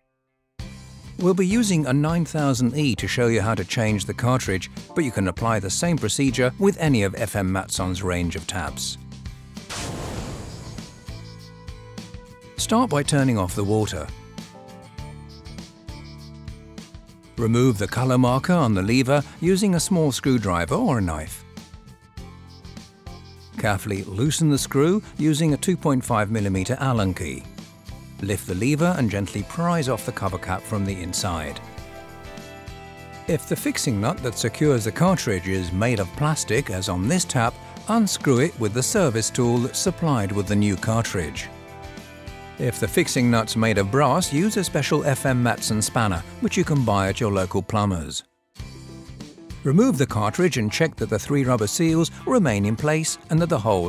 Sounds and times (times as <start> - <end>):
Music: 0.0 - 53.8
Speech: 1.2 - 9.0, 12.6 - 14.2, 17.4 - 21.4, 23.6 - 27.5, 28.2 - 31.6, 33.3 - 41.5, 42.6 - 48.3, 49.7 - 53.8.